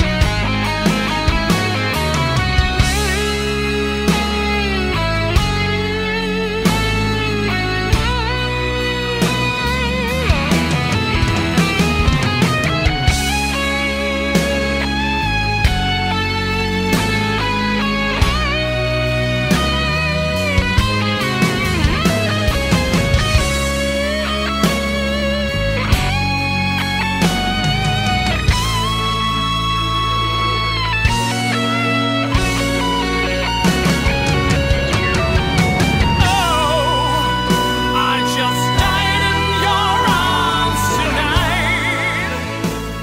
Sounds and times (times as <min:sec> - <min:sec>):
Guitar: 0:00.0 - 0:43.0.